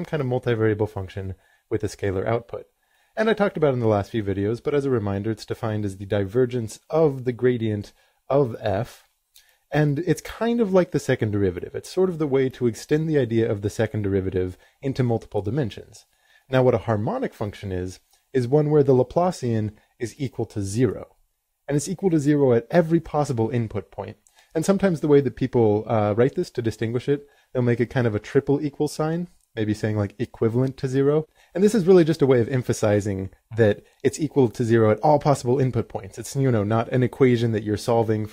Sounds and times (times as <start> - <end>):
Speech: 0.0 - 9.1, 9.7 - 38.3.